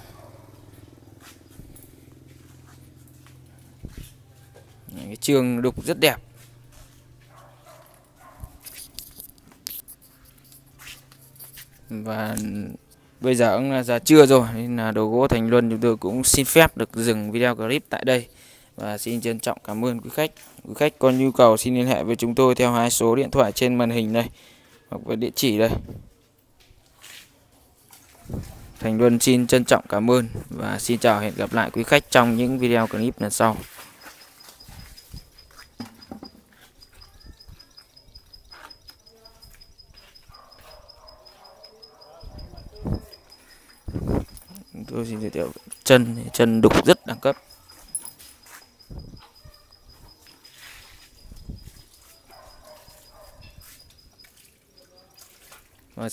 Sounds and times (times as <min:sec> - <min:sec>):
Speech: 0:04.9 - 0:06.2, 0:11.9 - 0:24.3, 0:24.9 - 0:25.9, 0:28.8 - 0:33.7, 0:41.6 - 0:43.3, 0:44.5 - 0:47.5.